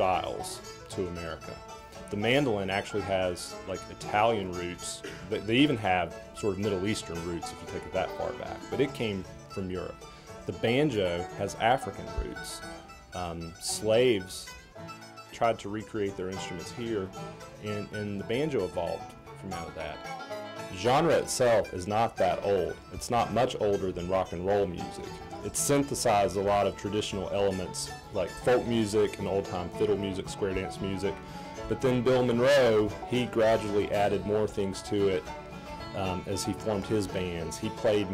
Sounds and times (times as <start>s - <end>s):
Speech: 0.0s - 12.6s, 13.2s - 14.5s, 15.4s - 20.0s, 20.7s - 35.3s, 36.0s - 38.1s
Bluegrass: 0.0s - 38.1s.